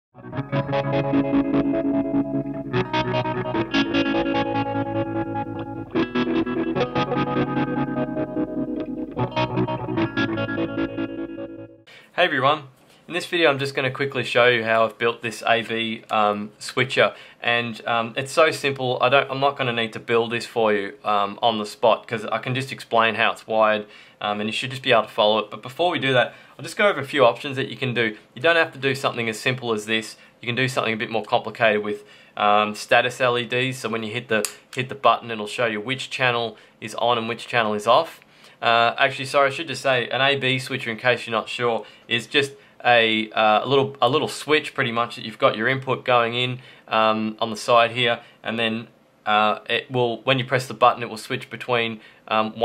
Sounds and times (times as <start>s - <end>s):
Effects unit: 0.2s - 11.9s.